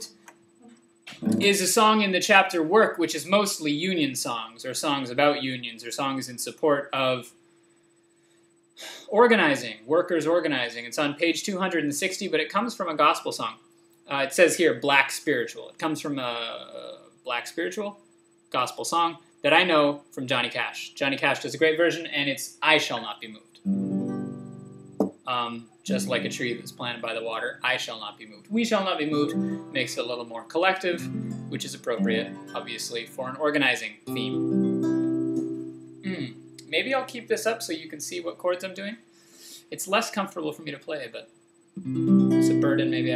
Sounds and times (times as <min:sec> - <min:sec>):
Music: 0:01.1 - 0:01.6, 0:23.7 - 0:25.2, 0:25.9 - 0:26.9, 0:29.1 - 0:30.1, 0:30.9 - 0:33.3, 0:34.1 - 0:36.6, 0:41.8 - 0:43.1
Speech: 0:01.2 - 0:07.3, 0:08.8 - 0:18.0, 0:18.6 - 0:23.6, 0:25.3 - 0:34.4, 0:36.1 - 0:39.0, 0:39.6 - 0:41.3, 0:42.4 - 0:43.1.